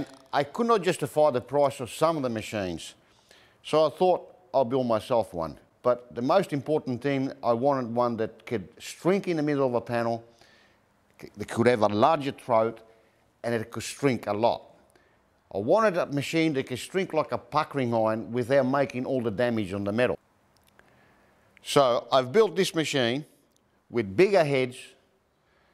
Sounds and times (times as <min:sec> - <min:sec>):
Speech: 0:00.0 - 0:03.0, 0:03.6 - 0:10.3, 0:11.2 - 0:14.7, 0:15.5 - 0:20.2, 0:21.6 - 0:23.3, 0:23.9 - 0:25.0.